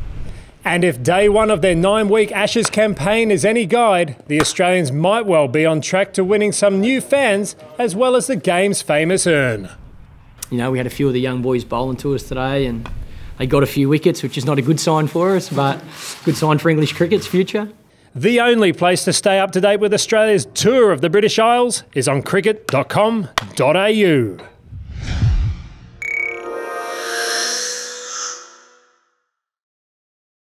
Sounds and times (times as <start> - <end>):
Whoosh, swoosh, swish: 24.7 - 26.0.